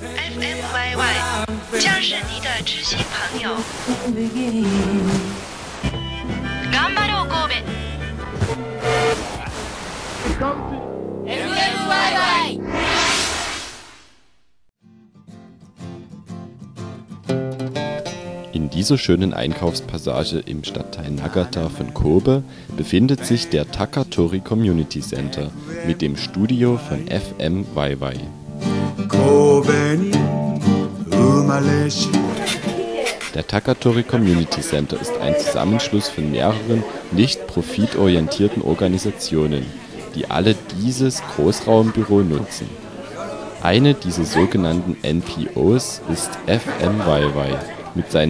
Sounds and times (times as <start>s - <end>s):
Music: 0.0s - 3.3s, 4.0s - 9.2s, 10.3s - 12.6s, 14.8s - 33.2s
Speech: 18.5s - 28.3s, 32.3s - 48.2s.